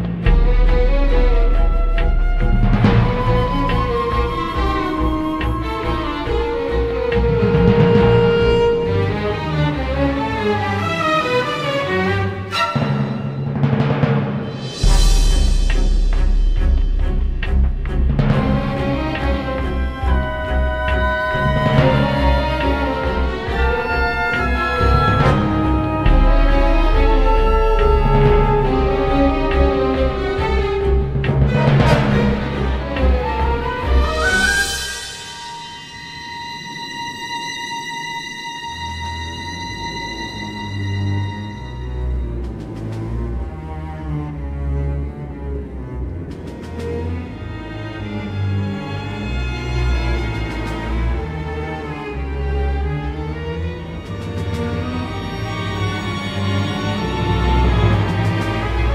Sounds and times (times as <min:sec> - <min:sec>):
Background music: 0:00.0 - 0:58.9
Timpani: 0:00.0 - 0:58.9.